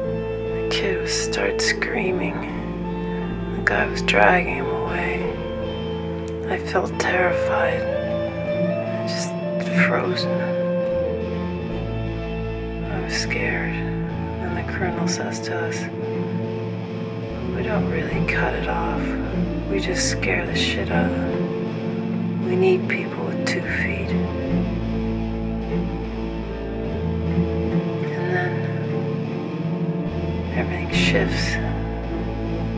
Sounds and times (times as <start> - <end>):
Music: 0.0 - 32.7
Speech: 0.6 - 2.7, 3.6 - 5.5, 6.4 - 8.0, 8.9 - 10.6, 12.8 - 15.9, 17.4 - 21.4, 22.4 - 24.3, 28.0 - 28.9, 30.5 - 31.8.